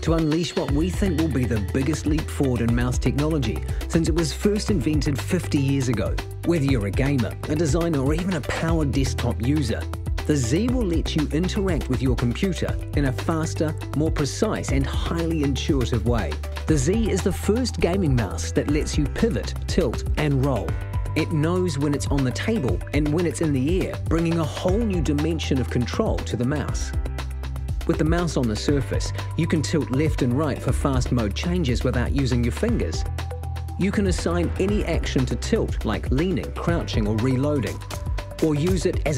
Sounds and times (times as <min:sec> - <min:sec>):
Speech: 0:00.0 - 0:27.0, 0:27.8 - 0:33.1, 0:33.8 - 0:37.8, 0:38.4 - 0:39.1
Music: 0:00.0 - 0:39.1.